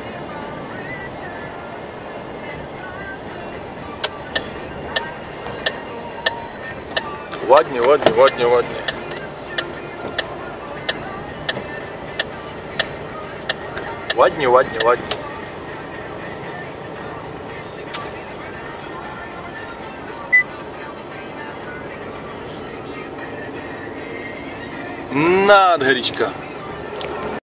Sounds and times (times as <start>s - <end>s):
Car: 0.0s - 27.4s
Music: 0.0s - 27.4s
Speech: 7.4s - 8.8s, 14.1s - 15.0s, 25.1s - 26.4s.